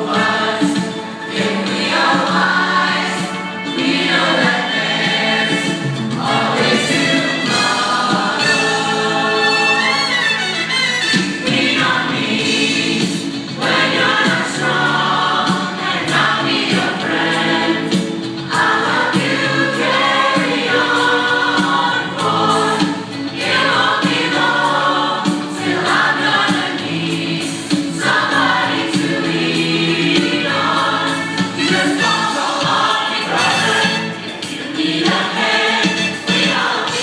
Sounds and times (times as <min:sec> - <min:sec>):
Choir: 0:00.0 - 0:37.0.